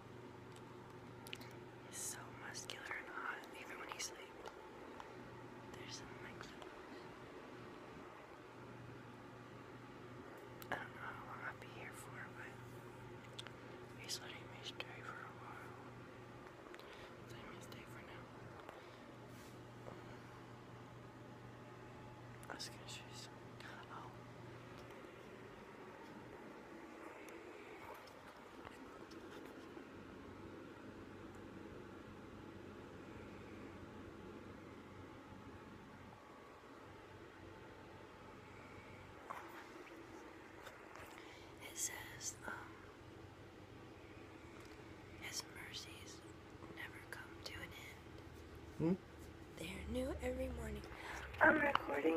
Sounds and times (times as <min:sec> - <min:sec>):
Whispering: 0:01.4 - 0:04.6, 0:05.6 - 0:07.2, 0:10.6 - 0:12.8, 0:13.4 - 0:15.9, 0:17.2 - 0:18.8, 0:22.4 - 0:24.2, 0:41.6 - 0:42.9, 0:45.1 - 0:48.1
Speech: 0:49.6 - 0:52.1.